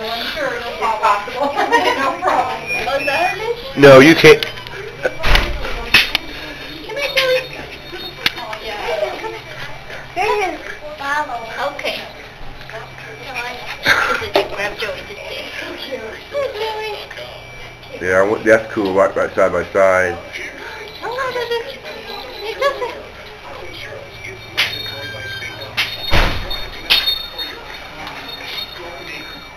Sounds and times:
Children playing: 0.0 - 17.9.

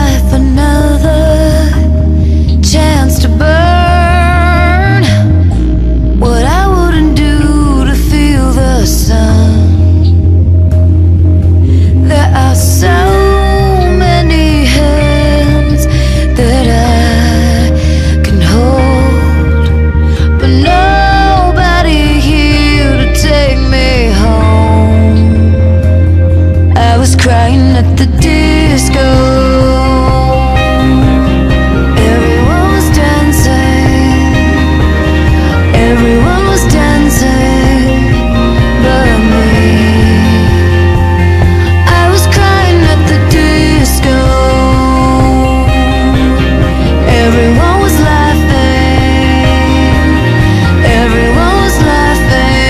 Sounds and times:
Disco: 0.0 - 52.7.

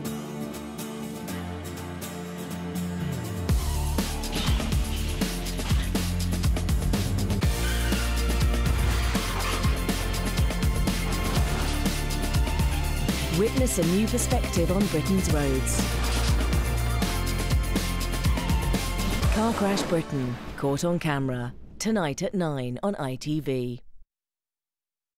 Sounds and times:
Music: 0.0 - 21.3
Speech: 13.3 - 15.8, 19.2 - 23.9.

